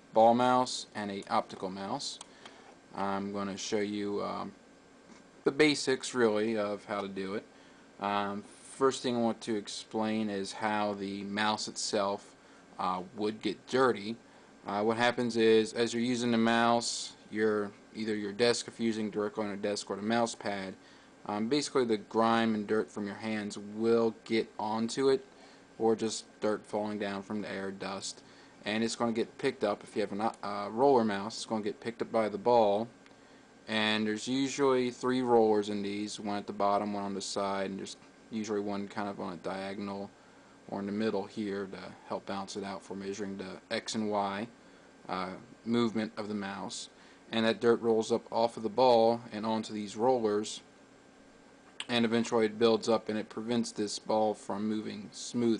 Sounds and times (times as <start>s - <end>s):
Speech: 0.1s - 2.3s, 2.9s - 4.6s, 5.4s - 33.0s, 33.7s - 50.7s, 51.8s - 55.5s.